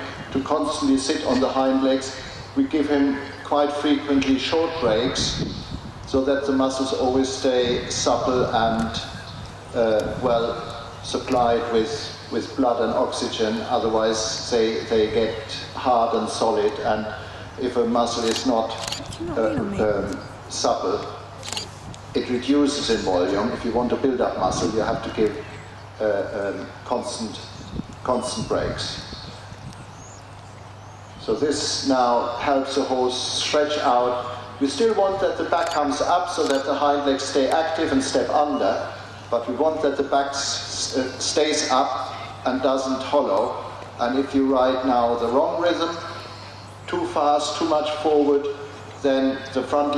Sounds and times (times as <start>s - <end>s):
Speech: 0.0s - 5.4s, 6.1s - 9.1s, 9.8s - 21.2s, 22.2s - 25.4s, 26.0s - 27.4s, 28.1s - 29.0s, 31.2s - 46.2s, 46.9s - 49.9s.